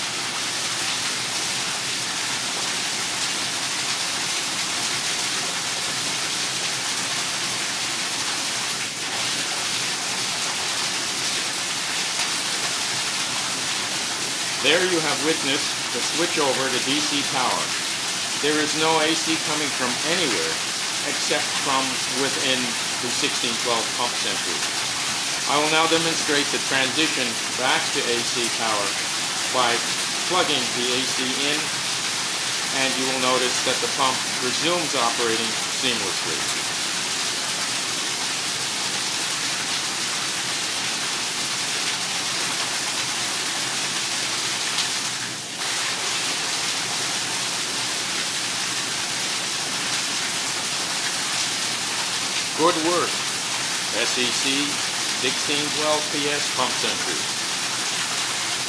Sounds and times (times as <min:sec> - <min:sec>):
Water: 0:00.0 - 0:58.6
Water tap, faucet: 0:00.0 - 0:58.6.